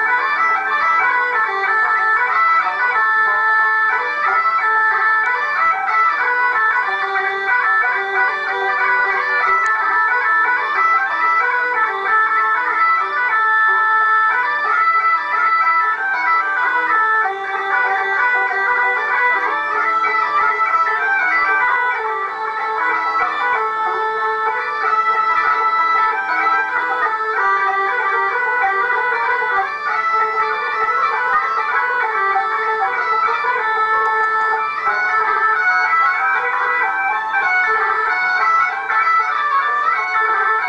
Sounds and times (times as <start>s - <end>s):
Violin, fiddle: 0.0s - 40.6s.